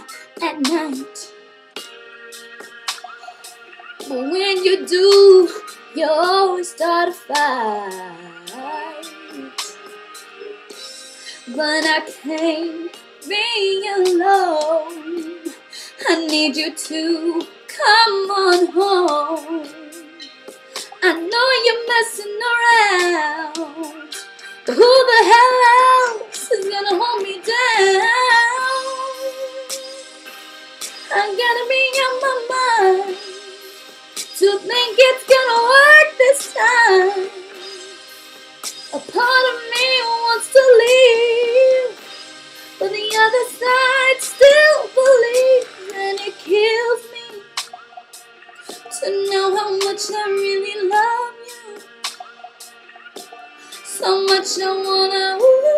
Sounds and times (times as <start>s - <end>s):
Female singing: 0.0s - 1.3s, 4.0s - 9.7s, 11.5s - 20.1s, 21.0s - 30.0s, 31.1s - 33.3s, 34.4s - 37.6s, 39.0s - 42.0s, 42.8s - 47.5s, 48.9s - 51.9s, 53.8s - 55.7s
Music: 0.0s - 55.7s.